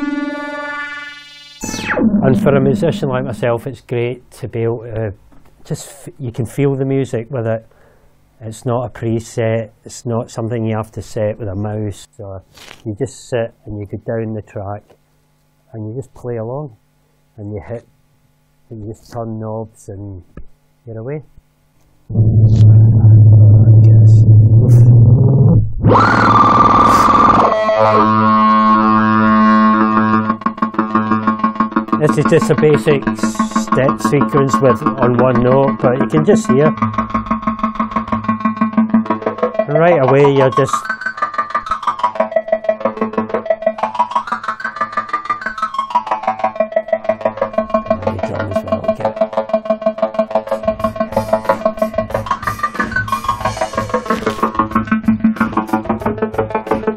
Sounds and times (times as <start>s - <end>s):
Speech: 2.2s - 7.7s, 8.4s - 15.0s, 15.7s - 16.8s, 17.4s - 17.9s, 18.7s - 20.3s, 20.9s - 21.3s, 22.4s - 24.9s, 27.8s - 28.2s, 32.0s - 36.8s, 39.7s - 40.9s, 47.9s - 49.1s.